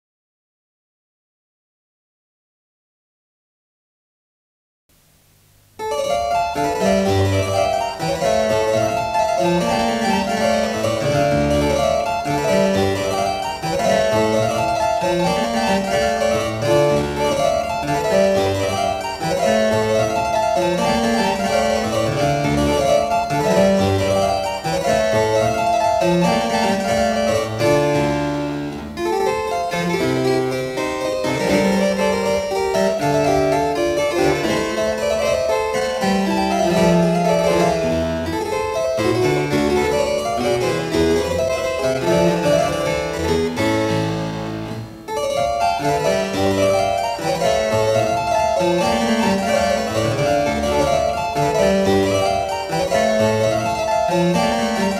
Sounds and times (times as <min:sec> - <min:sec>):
Harpsichord: 0:05.8 - 0:55.0.